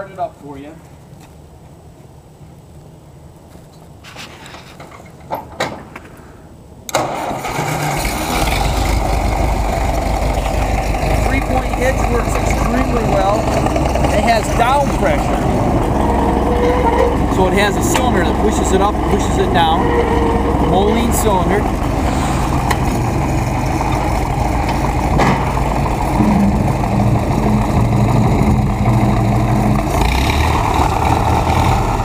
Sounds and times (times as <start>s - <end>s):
Vehicle: 0.0s - 32.0s.